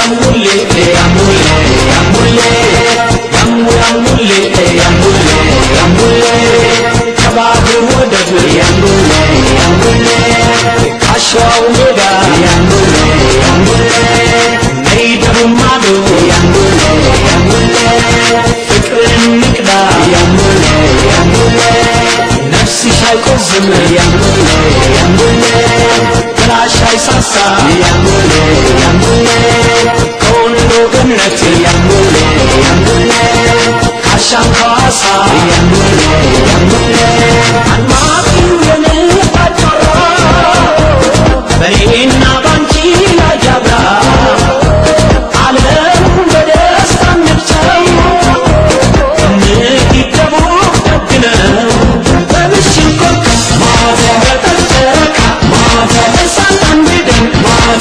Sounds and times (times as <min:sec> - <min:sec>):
Music: 0:00.0 - 0:57.8.